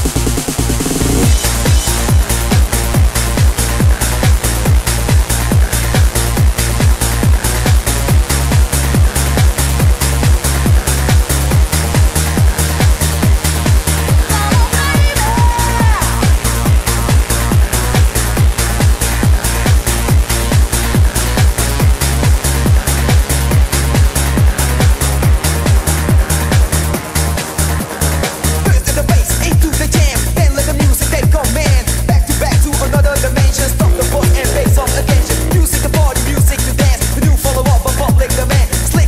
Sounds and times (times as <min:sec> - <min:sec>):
Trance music: 0:00.0 - 0:22.8, 0:32.5 - 0:38.5.